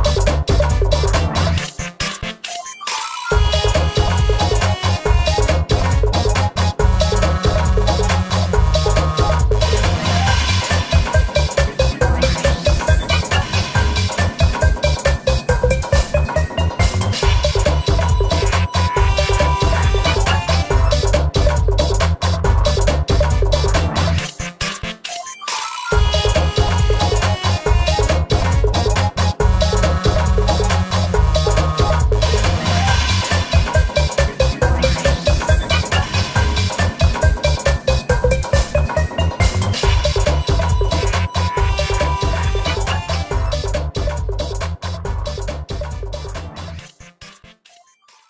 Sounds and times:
Music: 0.0 - 48.2.

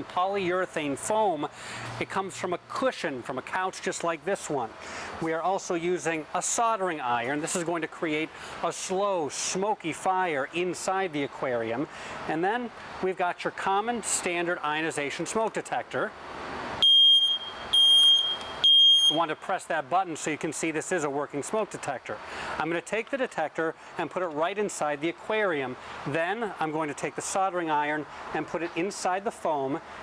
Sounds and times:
Speech: 0.0 - 16.1, 19.2 - 29.8.

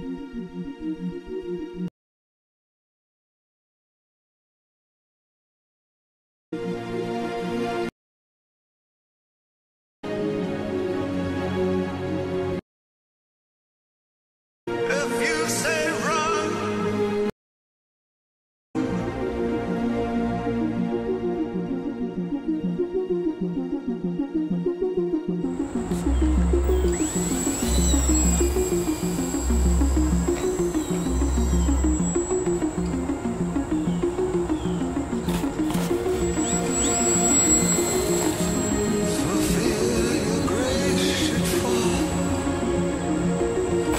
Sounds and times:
Music: 0.0 - 1.9, 6.5 - 8.0, 10.0 - 12.6, 14.7 - 17.4, 18.8 - 43.9.

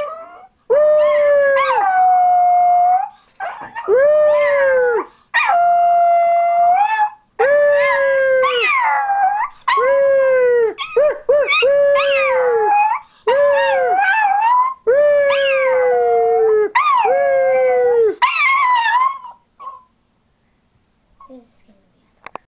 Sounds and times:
Whimper (dog): 0.0 - 10.1, 10.7 - 19.9
Yip: 18.2 - 19.9
Speech: 21.2 - 22.2.

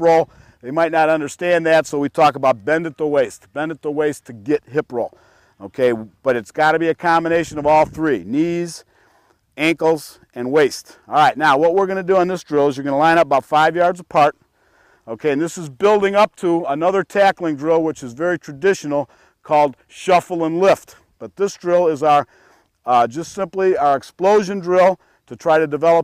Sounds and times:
Speech: 0.0 - 8.8, 9.6 - 14.4, 15.1 - 22.3, 22.9 - 26.0.

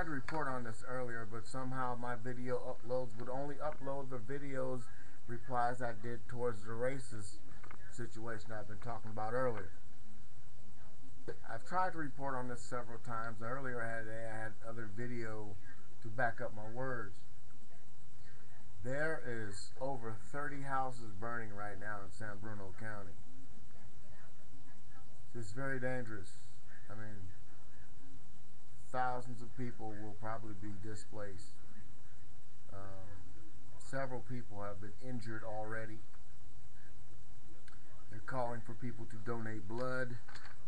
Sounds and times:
Speech: 0.0 - 9.8, 10.7 - 28.2, 28.8 - 36.1, 37.6 - 40.6.

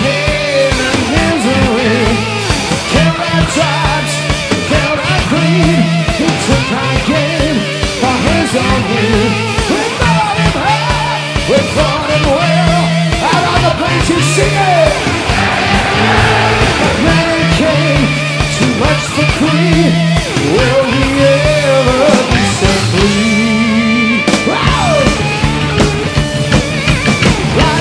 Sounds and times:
Music: 0.0 - 27.8.

